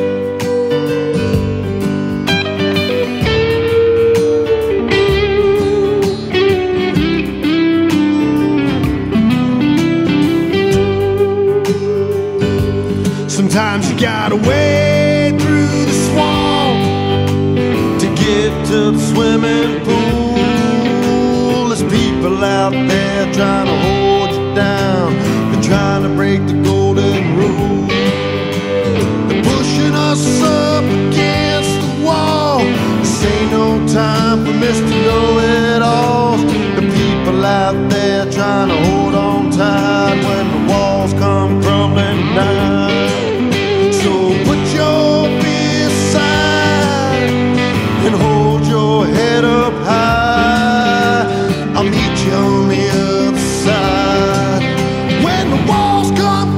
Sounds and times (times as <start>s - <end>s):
Guitar: 0.0s - 56.5s.